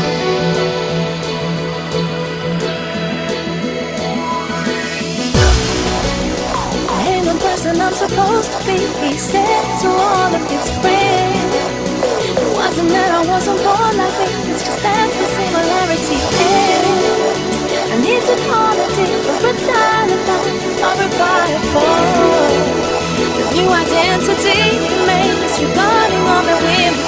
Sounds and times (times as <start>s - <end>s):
Music: 0.0s - 27.0s.